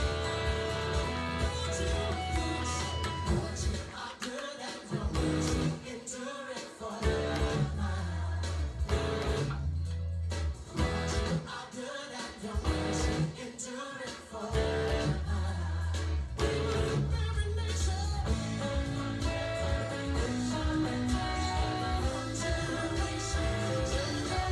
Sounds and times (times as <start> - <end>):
Acoustic guitar: 0.0 - 24.5.